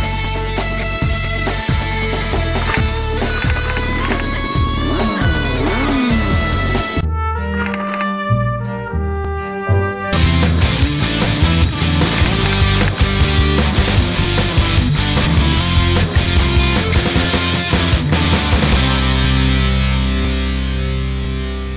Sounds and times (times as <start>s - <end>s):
Music: 0.0s - 21.7s.